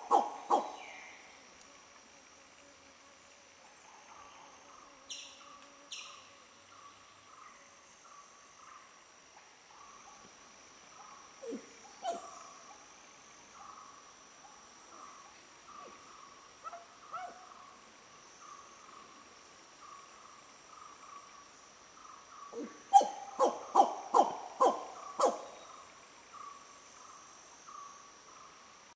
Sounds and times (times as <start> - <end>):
Owl: 0.0 - 1.3, 11.0 - 12.8, 16.6 - 17.6, 22.4 - 25.8.